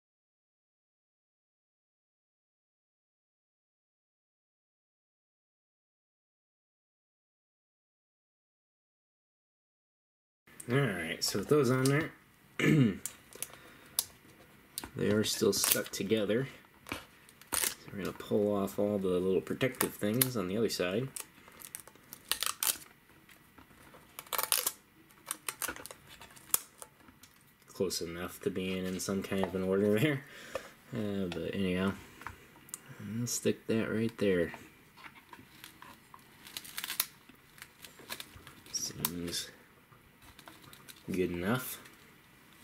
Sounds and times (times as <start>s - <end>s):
Speech: 10.6s - 12.2s, 14.9s - 16.6s, 17.8s - 21.2s, 27.7s - 30.3s, 30.9s - 32.0s, 33.0s - 34.6s, 38.7s - 39.6s, 41.1s - 41.9s.